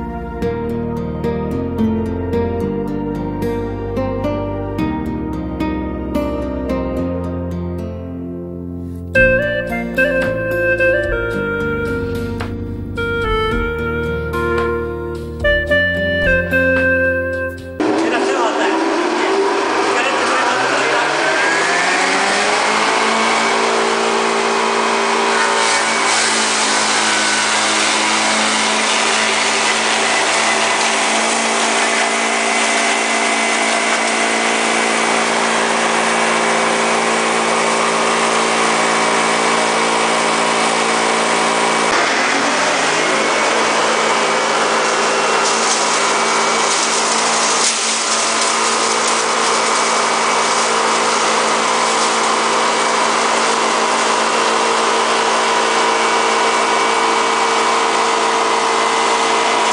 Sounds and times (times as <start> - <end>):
Music: 0.0 - 18.4
Speech: 17.8 - 21.5.